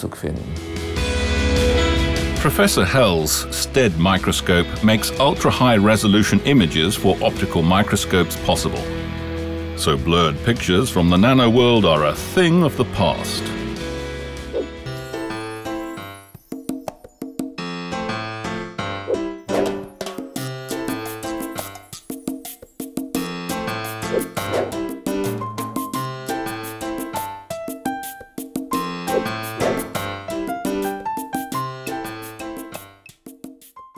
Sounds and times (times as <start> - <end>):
Music: 0.0 - 33.9.